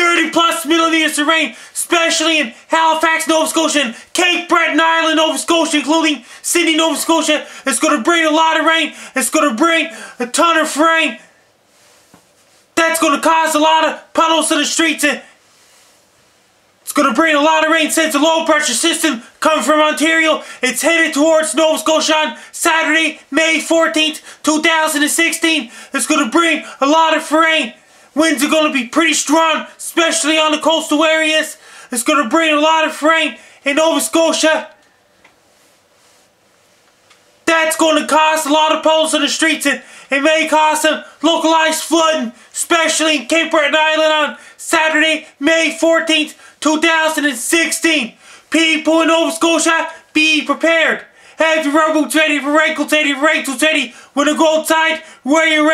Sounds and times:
Speech: 0.0s - 11.3s, 12.8s - 15.4s, 16.8s - 34.8s, 37.4s - 55.7s.

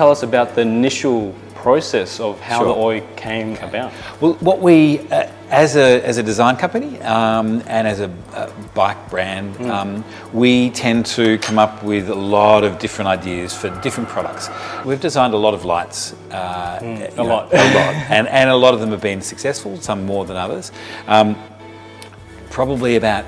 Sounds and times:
Speech: 0.0s - 21.4s, 22.5s - 23.2s
Music: 0.0s - 23.2s.

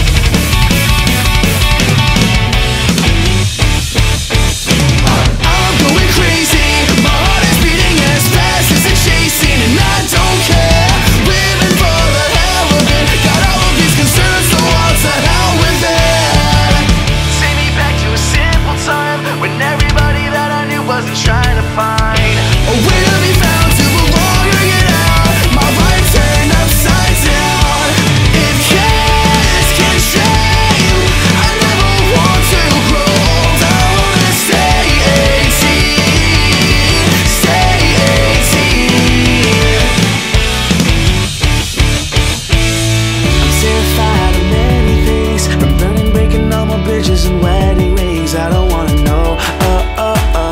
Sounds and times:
Music: 0.0s - 50.5s.

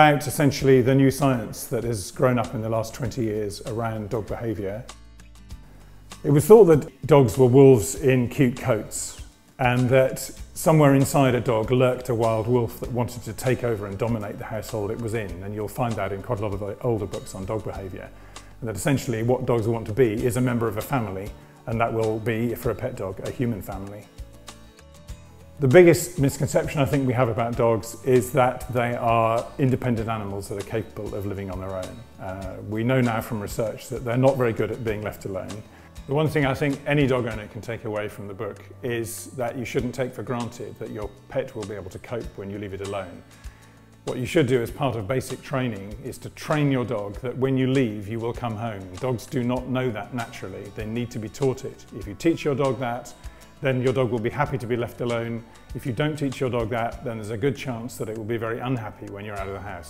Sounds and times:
Speech: 0.0s - 5.0s, 6.2s - 24.1s, 25.6s - 43.2s, 44.1s - 59.9s
Music: 0.0s - 59.9s.

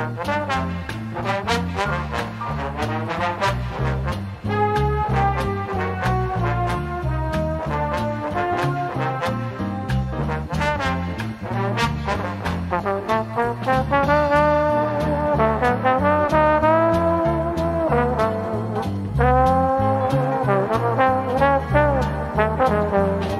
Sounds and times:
Swing music: 0.0s - 23.3s
Trombone: 0.0s - 23.3s
Trumpet: 0.0s - 23.3s.

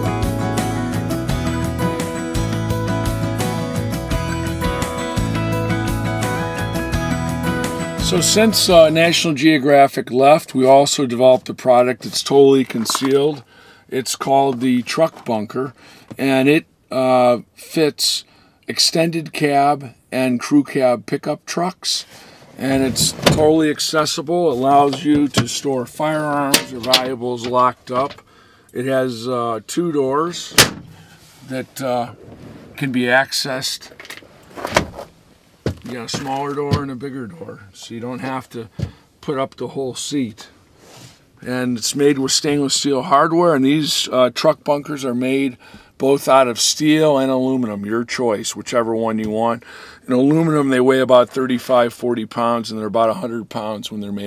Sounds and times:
Speech: 8.0s - 28.2s, 28.8s - 30.6s, 31.4s - 32.2s, 32.8s - 34.0s, 35.8s - 40.6s, 41.4s - 54.2s.

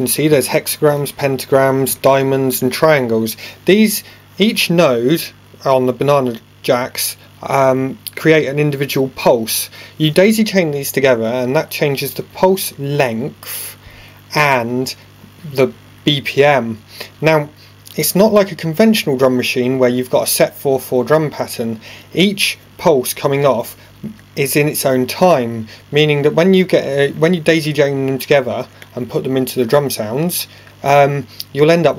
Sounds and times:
Speech: 0.0s - 31.9s.

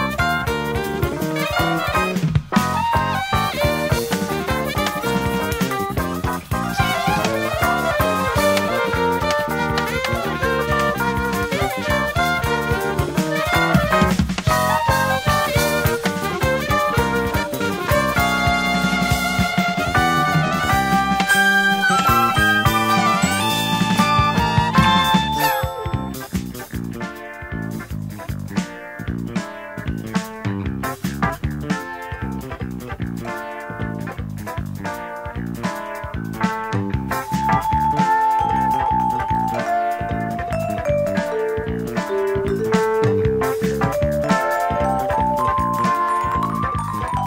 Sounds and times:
Piano: 0.0s - 32.2s, 34.9s - 47.2s.

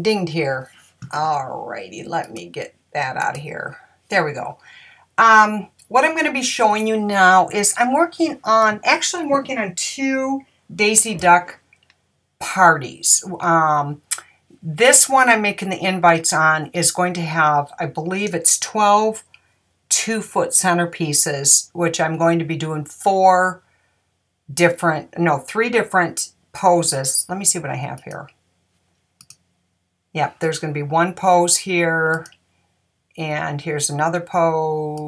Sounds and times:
Speech: 0.0s - 4.6s, 5.2s - 11.6s, 12.4s - 19.2s, 19.9s - 23.6s, 24.5s - 28.3s, 30.2s - 32.3s, 33.2s - 35.0s.

